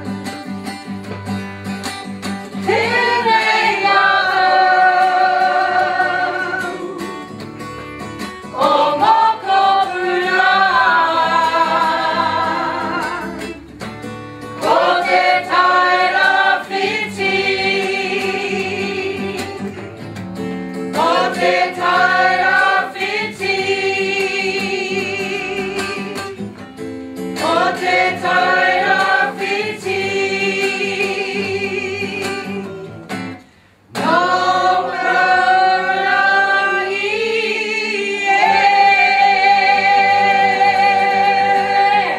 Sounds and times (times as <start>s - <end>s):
Music: 0.0s - 42.1s
Singing: 2.7s - 7.4s, 8.5s - 13.5s, 14.6s - 19.8s, 21.0s - 26.4s, 27.4s - 32.8s, 34.0s - 42.1s.